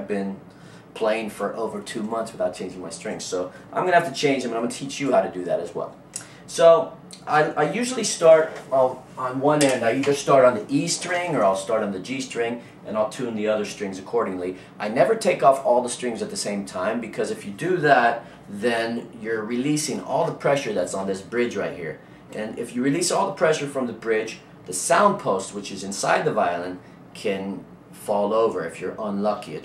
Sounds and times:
Speech: 0:00.0 - 0:00.4, 0:01.0 - 0:29.6.

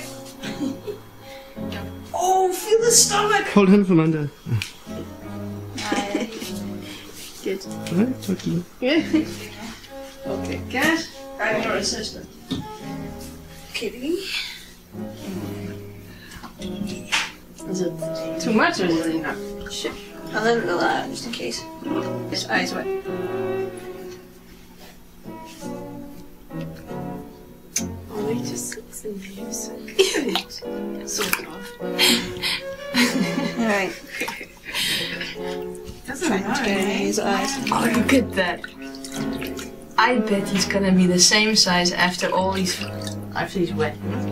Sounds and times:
Music: 0:00.0 - 0:44.3.

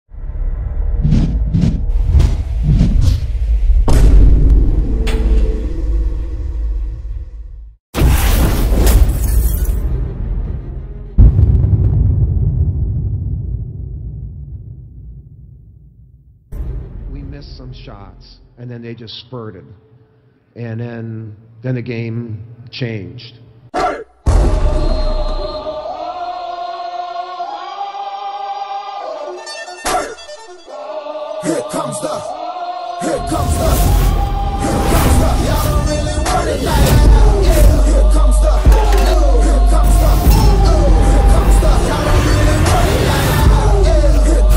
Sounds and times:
Boom: 0:00.6 - 0:09.2, 0:11.2 - 0:16.4
Whoosh, swoosh, swish: 0:01.0 - 0:03.8.

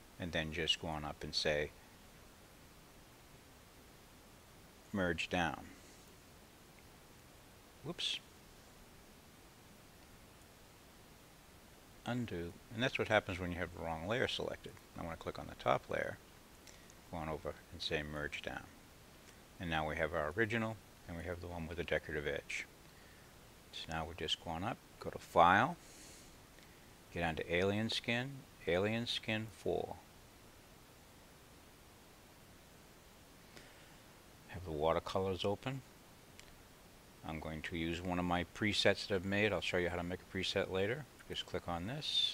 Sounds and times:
Speech: 0:00.2 - 0:01.8, 0:04.9 - 0:05.8, 0:07.8 - 0:08.3, 0:12.0 - 0:16.2, 0:17.1 - 0:18.8, 0:19.6 - 0:22.7, 0:23.7 - 0:25.8, 0:27.1 - 0:30.0, 0:34.5 - 0:35.9, 0:37.2 - 0:42.3.

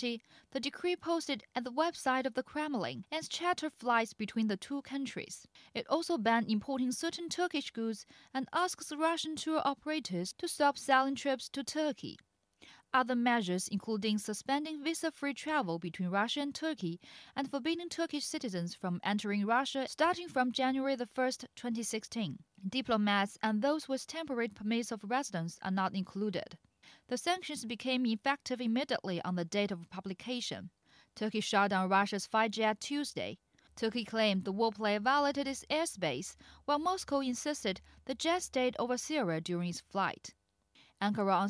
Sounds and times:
Speech: 0:00.0 - 0:12.2, 0:12.9 - 0:40.3, 0:41.0 - 0:41.5.

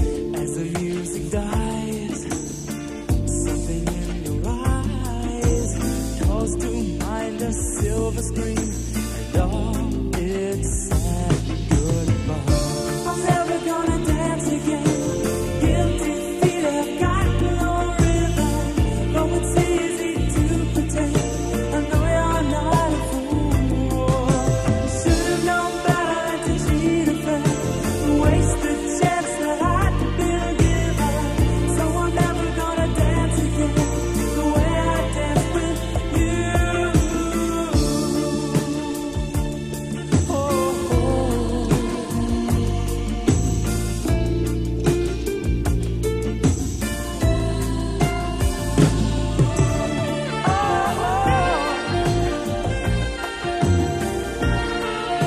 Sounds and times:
Soul music: 0:00.0 - 0:55.2.

